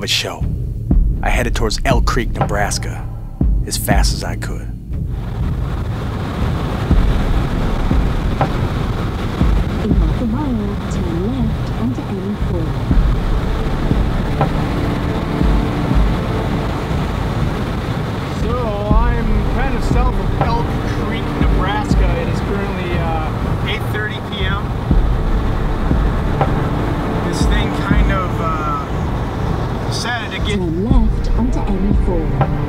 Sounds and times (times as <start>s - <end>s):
Thunder: 5.0s - 11.8s, 12.4s - 32.6s.